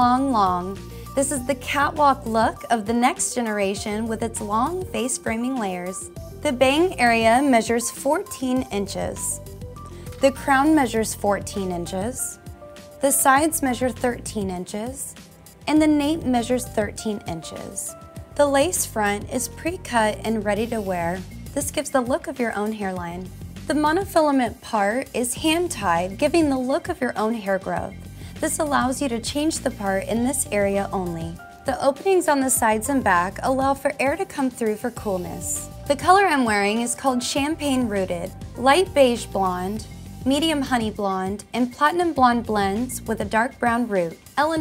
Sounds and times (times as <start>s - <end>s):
Speech: 0.0s - 9.4s, 10.2s - 12.4s, 13.0s - 44.6s
Music: 0.0s - 44.6s.